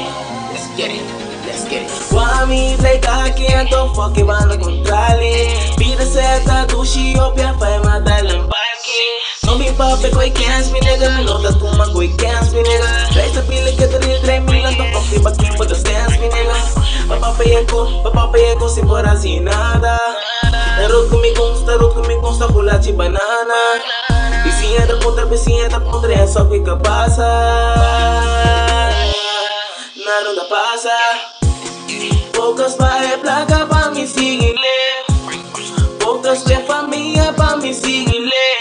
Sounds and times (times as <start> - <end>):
Music: 0.0 - 38.6.